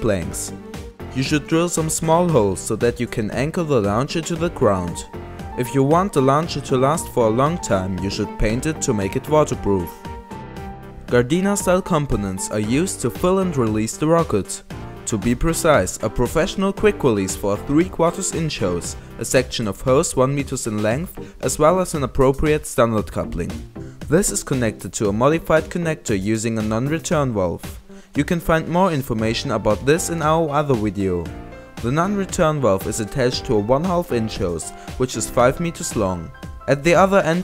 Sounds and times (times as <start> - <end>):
Speech: 0.0 - 10.0, 11.1 - 37.4
Music: 0.0 - 37.4.